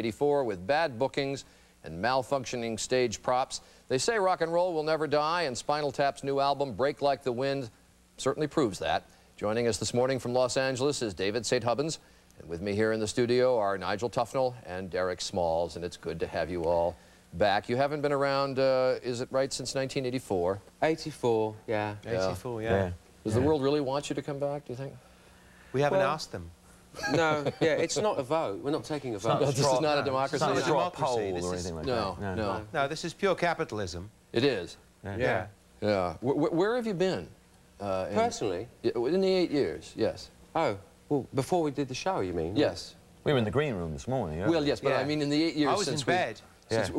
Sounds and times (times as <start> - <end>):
Speech: 0.0 - 25.0, 27.1 - 46.9.